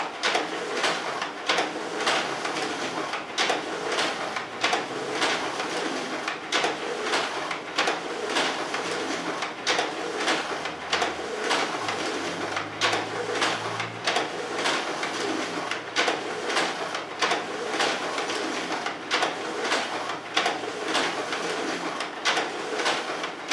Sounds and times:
Printer: 0:00.0 - 0:23.5.

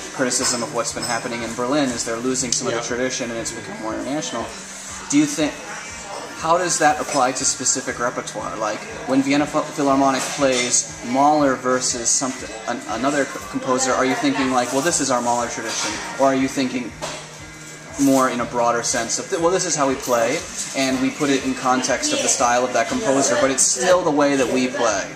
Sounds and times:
Speech: 0:00.0 - 0:17.0, 0:18.0 - 0:25.1
Music: 0:00.0 - 0:25.1.

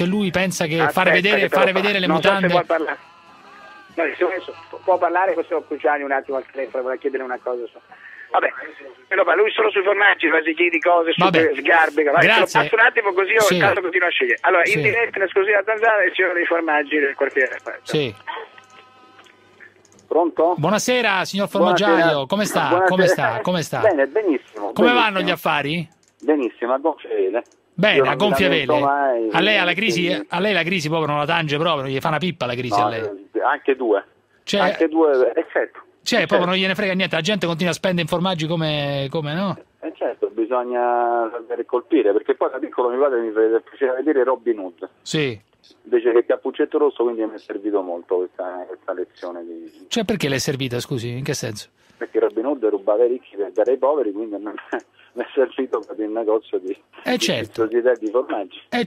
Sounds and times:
Speech: 0:00.0 - 0:03.0, 0:04.0 - 0:18.2, 0:20.1 - 0:58.8
Radio: 0:00.0 - 0:30.8, 0:32.6 - 0:36.6, 0:39.7 - 0:45.0, 0:51.5 - 0:58.8.

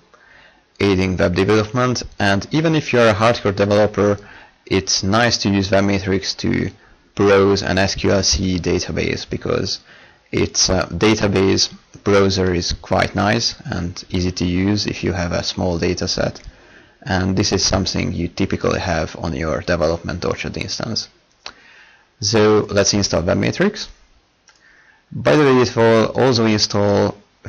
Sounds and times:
Speech: 0:00.8 - 0:21.2, 0:22.2 - 0:24.0, 0:25.1 - 0:27.4.

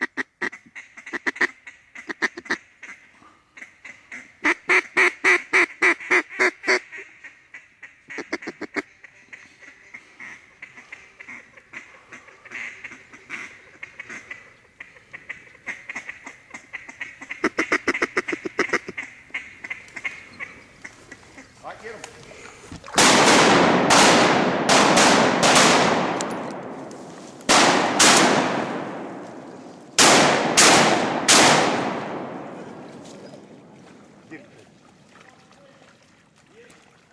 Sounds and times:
Duck: 0:00.0 - 0:21.7
Honk: 0:00.0 - 0:21.7
Speech: 0:21.6 - 0:22.4, 0:34.3 - 0:36.8.

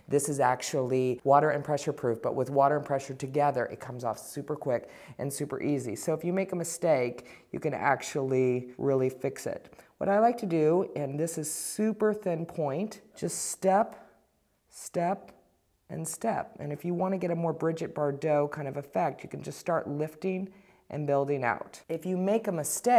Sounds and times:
Speech: 0:00.0 - 0:14.1, 0:14.7 - 0:22.9.

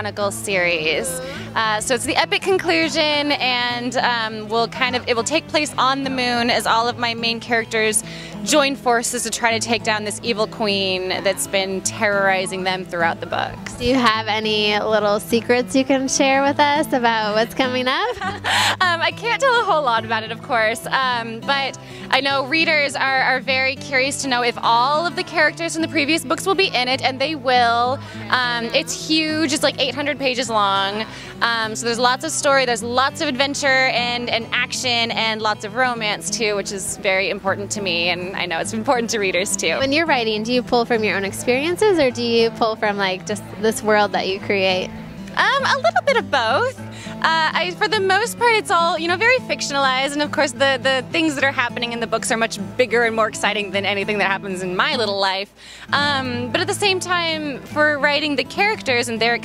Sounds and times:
Music: 0:00.0 - 0:59.4
Speech: 0:00.0 - 0:59.4.

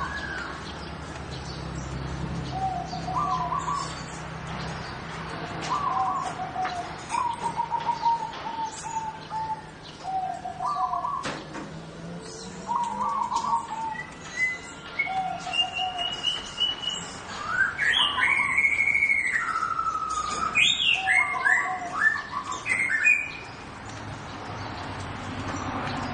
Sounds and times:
Chirp, tweet: 0:00.0 - 0:26.1.

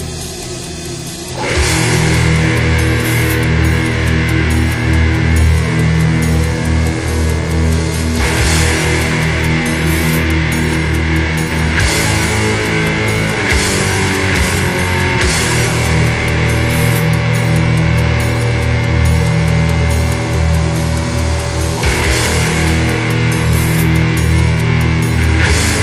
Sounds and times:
Music: 0:00.0 - 0:25.8.

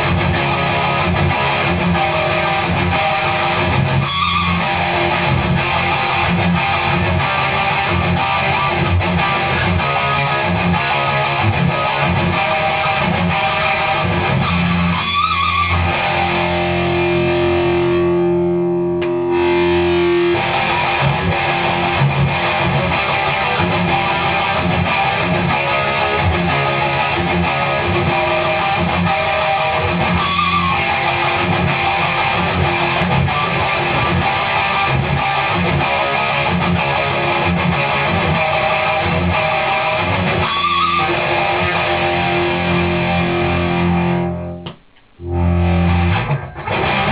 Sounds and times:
Music: 0:00.0 - 0:47.1.

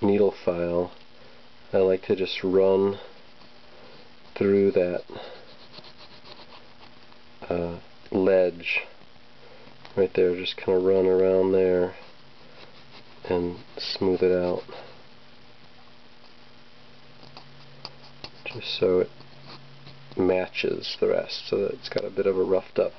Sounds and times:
Speech: 0:00.0 - 0:01.0, 0:01.7 - 0:03.1, 0:04.4 - 0:05.2, 0:07.4 - 0:09.0, 0:10.0 - 0:12.0, 0:13.2 - 0:14.9, 0:18.4 - 0:19.1, 0:20.2 - 0:22.9.

